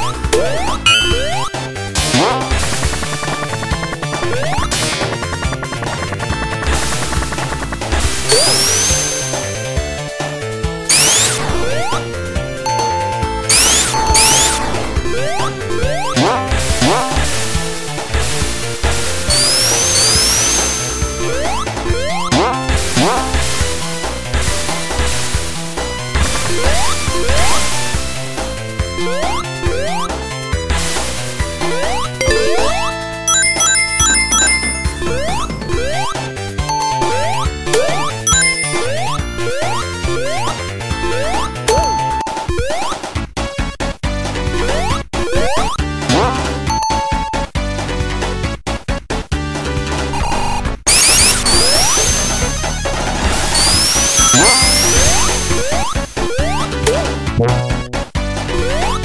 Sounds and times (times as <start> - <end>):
Music: 0.0 - 59.0.